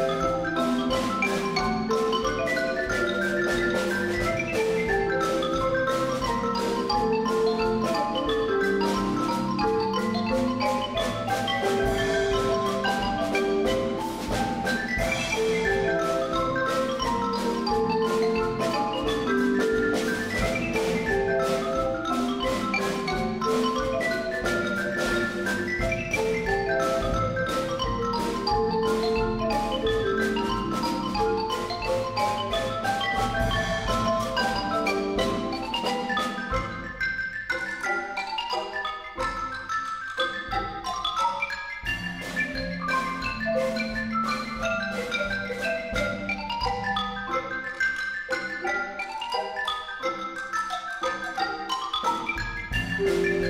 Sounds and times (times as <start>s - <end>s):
Glockenspiel: 0.0s - 53.4s
Marimba, xylophone: 0.0s - 53.4s.